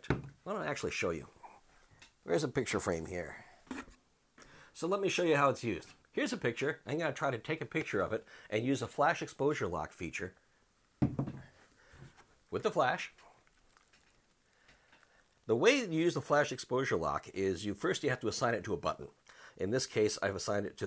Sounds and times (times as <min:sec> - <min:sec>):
Speech: 0:00.0 - 0:01.4, 0:02.2 - 0:03.4, 0:04.8 - 0:10.4, 0:12.5 - 0:13.2, 0:15.5 - 0:20.8.